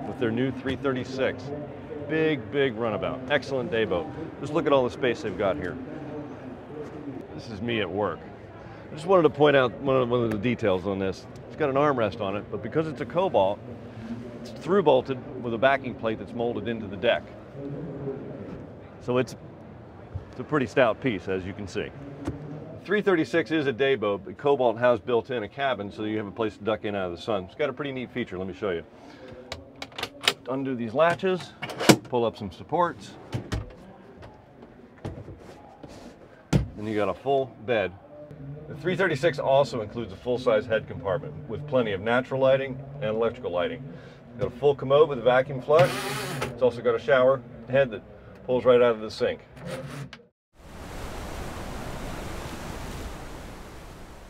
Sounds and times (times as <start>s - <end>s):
Speech: 0.0s - 13.6s, 14.4s - 19.4s, 20.4s - 22.0s, 22.8s - 33.2s, 36.8s - 38.0s, 38.7s - 49.5s.